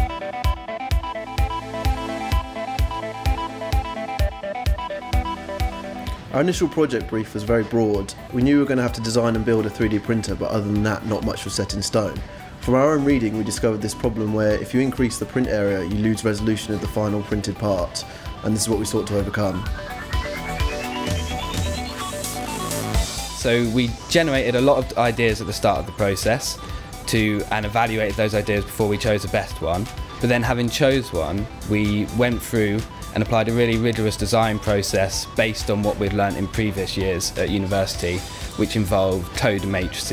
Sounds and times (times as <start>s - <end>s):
Music: 0.0s - 40.1s
Speech: 6.3s - 19.7s, 23.4s - 40.1s.